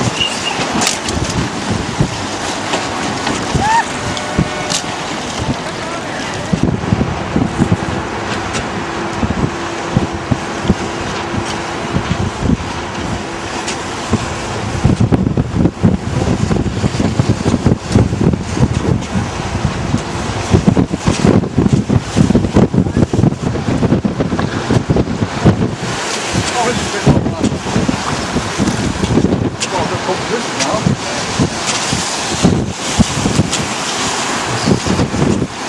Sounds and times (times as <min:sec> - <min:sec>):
Sailboat, sailing ship: 0:00.0 - 0:35.6
Wind noise (microphone): 0:00.0 - 0:35.6.